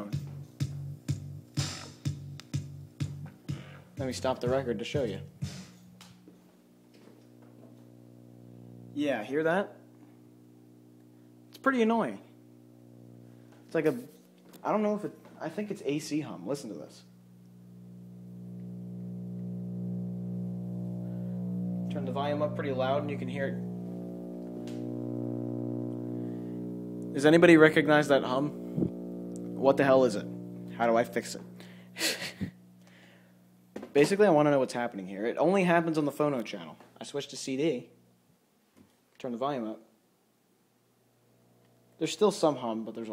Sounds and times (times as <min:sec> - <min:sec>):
Music: 0:00.0 - 0:06.4
Speech: 0:04.0 - 0:05.3, 0:09.0 - 0:09.8, 0:11.6 - 0:12.2, 0:13.7 - 0:17.1, 0:21.9 - 0:23.6, 0:27.2 - 0:28.5, 0:29.6 - 0:31.5, 0:34.0 - 0:38.0, 0:39.2 - 0:39.9, 0:42.0 - 0:43.1.